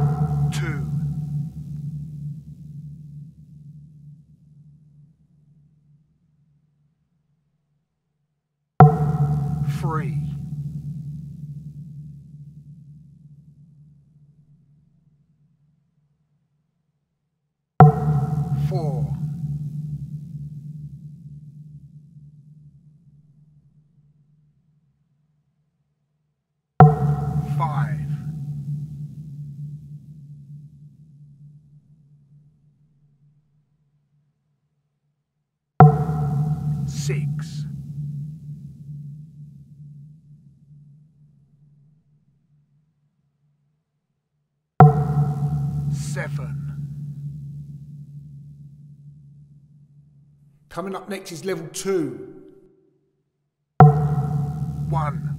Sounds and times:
Speech: 0.5s - 1.0s, 9.7s - 10.4s, 18.6s - 19.2s, 27.4s - 28.3s, 36.9s - 37.7s, 46.0s - 46.7s, 50.7s - 52.5s, 54.9s - 55.3s.

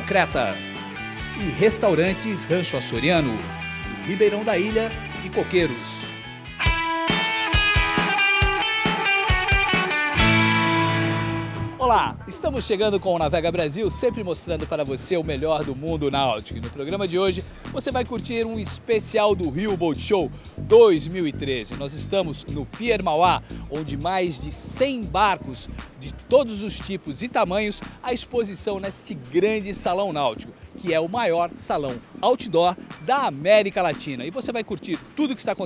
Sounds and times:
Speech: 0.0s - 0.6s, 1.4s - 6.1s, 11.8s - 35.6s
Music: 0.0s - 35.6s.

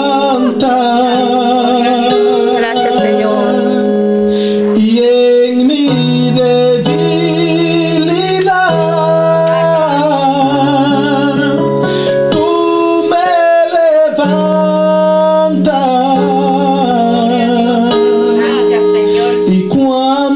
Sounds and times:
Male singing: 0.0s - 3.9s, 4.7s - 20.3s
Musical instrument: 0.0s - 20.3s.

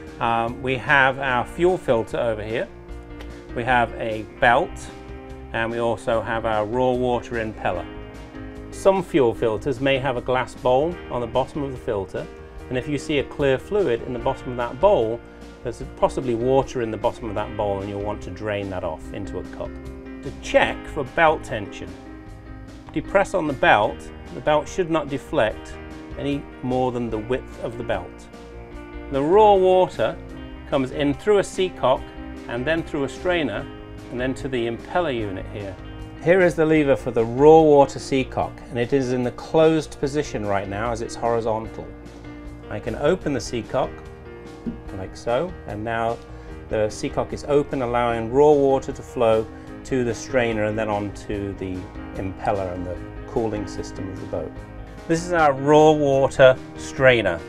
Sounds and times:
Music: 0.0s - 57.4s
Speech: 0.2s - 2.7s, 3.6s - 7.9s, 8.8s - 22.0s, 22.9s - 28.3s, 29.1s - 41.9s, 42.7s - 43.9s, 44.8s - 57.4s.

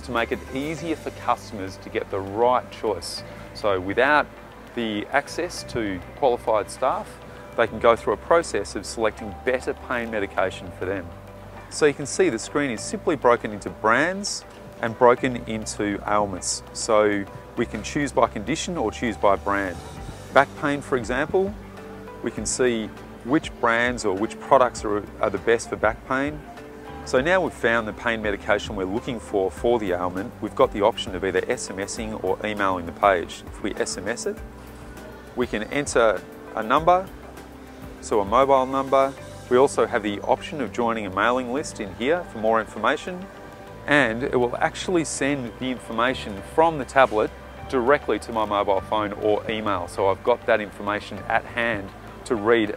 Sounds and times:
Speech: 0.0s - 11.1s, 11.7s - 21.6s, 22.2s - 26.4s, 27.1s - 34.4s, 35.4s - 37.1s, 38.0s - 43.3s, 43.9s - 52.7s
Music: 0.0s - 52.7s.

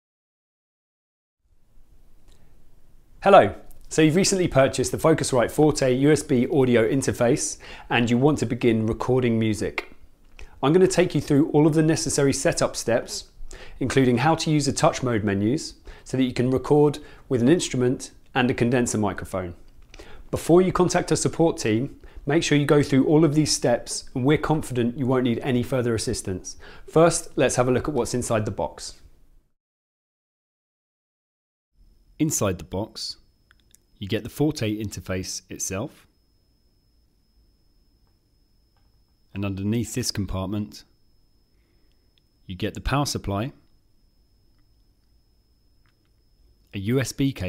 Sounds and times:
Speech: 3.2s - 10.0s, 10.6s - 19.6s, 20.3s - 29.1s, 32.2s - 33.3s, 34.0s - 36.1s, 39.3s - 41.0s, 42.5s - 43.7s, 46.7s - 47.4s.

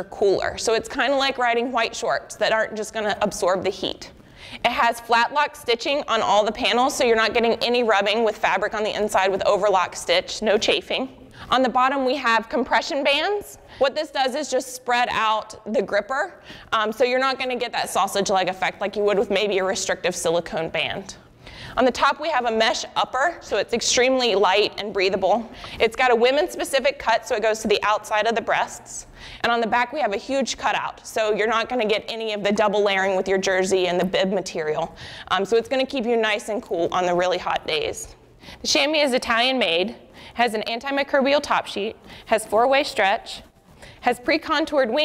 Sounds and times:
Speech: 0.0s - 21.2s, 21.8s - 45.0s.

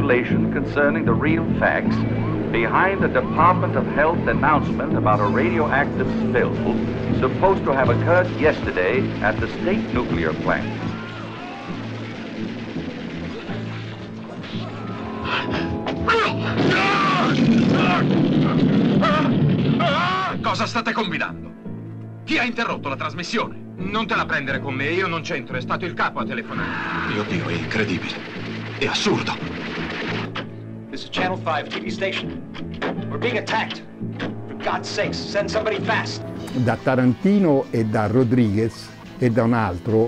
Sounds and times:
Music: 0.0s - 40.0s
Speech: 2.6s - 10.7s, 34.6s - 40.0s.

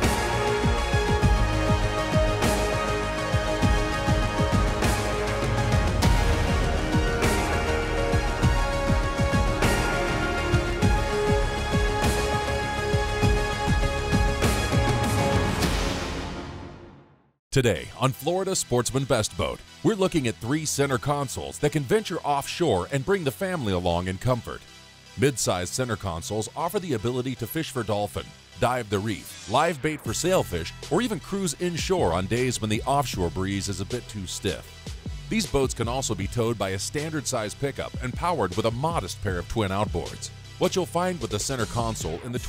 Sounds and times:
Music: 0.0s - 42.4s
Speech: 17.5s - 24.6s, 25.2s - 34.7s, 35.3s - 42.4s.

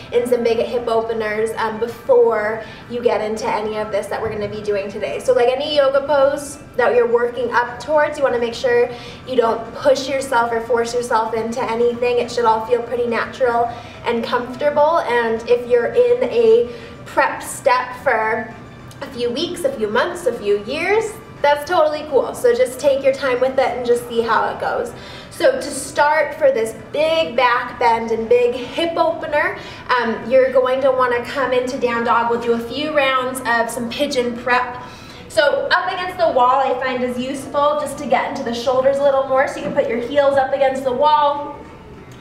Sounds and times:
Music: 0.0s - 42.2s
Speech: 0.1s - 41.6s.

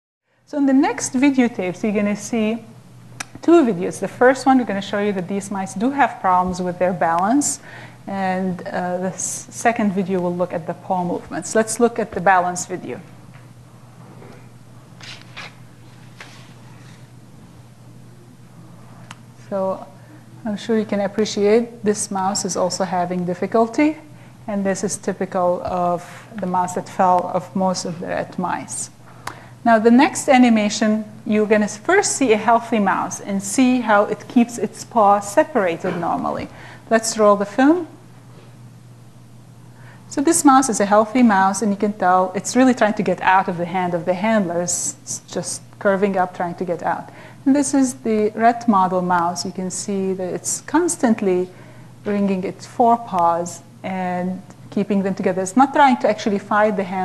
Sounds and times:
Speech: 0.5s - 2.7s, 3.4s - 13.1s, 19.4s - 29.0s, 29.6s - 38.0s, 40.1s - 51.5s, 52.1s - 57.0s.

